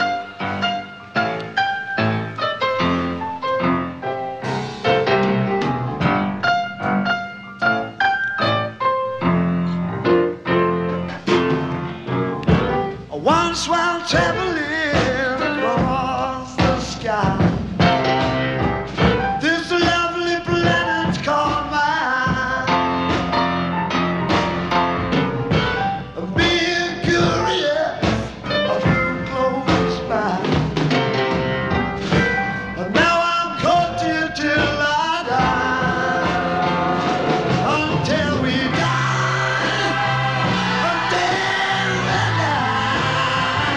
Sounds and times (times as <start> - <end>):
Music: 0.0 - 43.7.